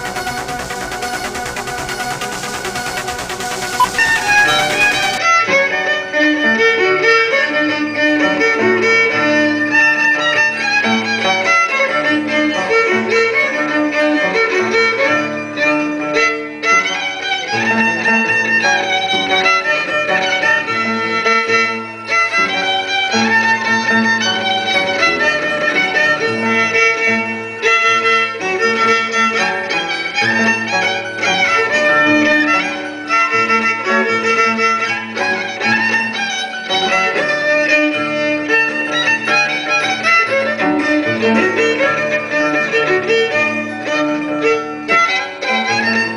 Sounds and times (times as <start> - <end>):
Violin, fiddle: 5.2 - 46.1.